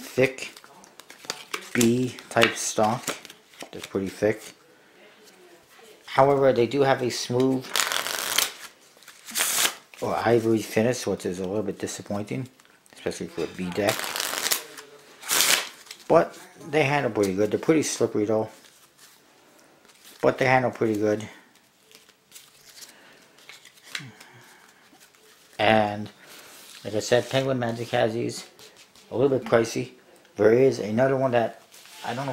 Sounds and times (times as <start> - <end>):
Shuffling cards: 7.4 - 9.8, 13.7 - 16.0.